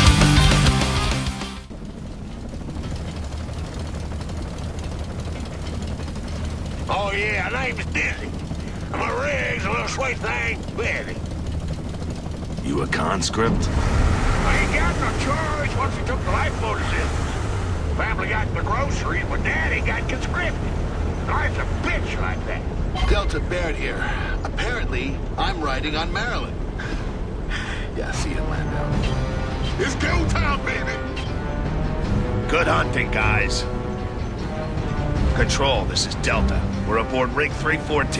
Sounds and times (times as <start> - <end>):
Music: 0.0 - 1.8, 7.1 - 17.4, 28.0 - 38.1
Vehicle: 0.0 - 38.1.